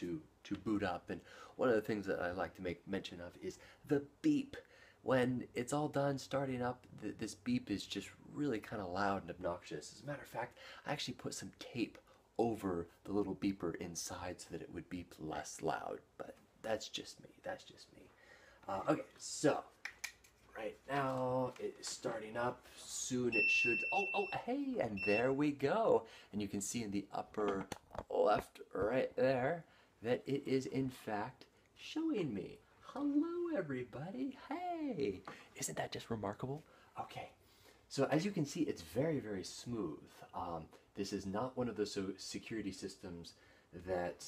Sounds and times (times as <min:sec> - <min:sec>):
Speech: 0:00.0 - 0:19.8, 0:20.5 - 0:44.2
Inside, small room: 0:00.0 - 0:44.2.